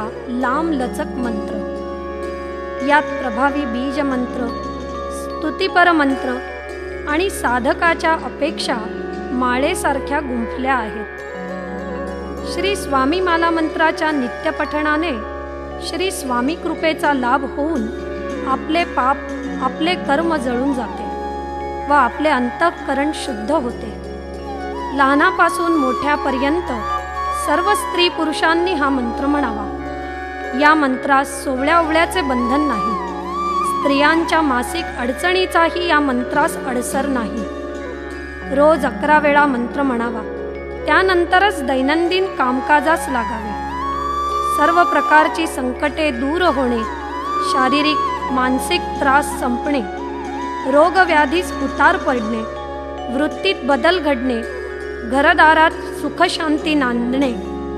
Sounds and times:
Speech: 0:00.0 - 0:01.6, 0:02.8 - 0:04.5, 0:05.2 - 0:06.4, 0:07.1 - 0:11.1, 0:12.5 - 0:15.2, 0:15.8 - 0:21.1, 0:21.9 - 0:24.0, 0:24.9 - 0:26.8, 0:27.4 - 0:29.8, 0:30.5 - 0:33.0, 0:33.8 - 0:37.5, 0:38.5 - 0:43.6, 0:44.6 - 0:49.9, 0:50.7 - 0:52.5, 0:53.1 - 0:54.5, 0:55.1 - 0:57.4.

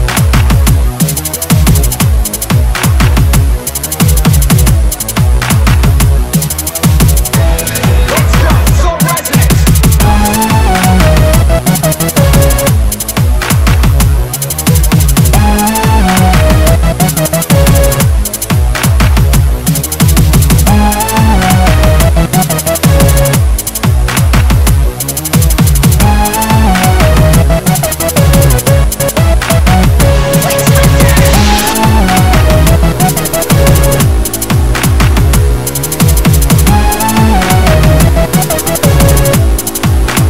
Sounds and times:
Dubstep: 0:00.0 - 0:40.2.

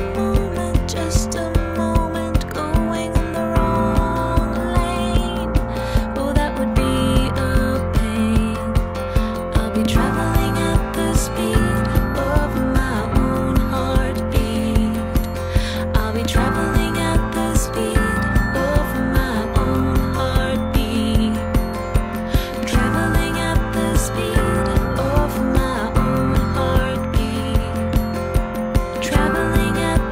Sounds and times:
Music: 0:00.0 - 0:30.1.

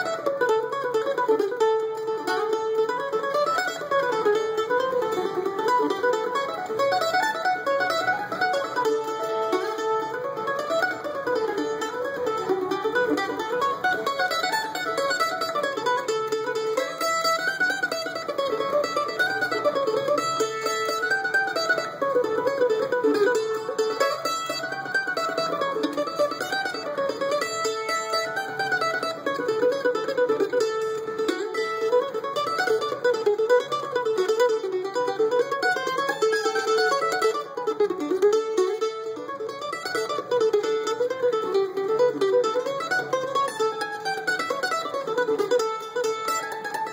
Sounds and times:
Mandolin: 0:00.0 - 0:46.9.

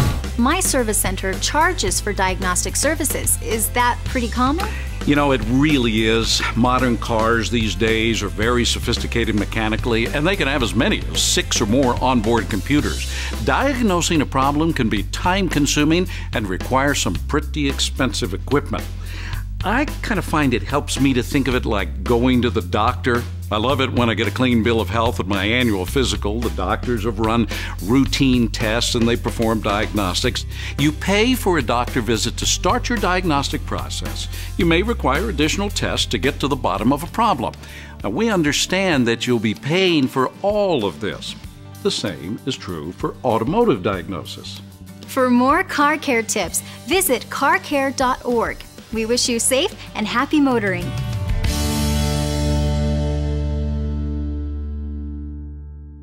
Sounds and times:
Music: 0:00.0 - 0:56.0
Speech: 0:00.4 - 0:18.9, 0:19.6 - 0:50.9.

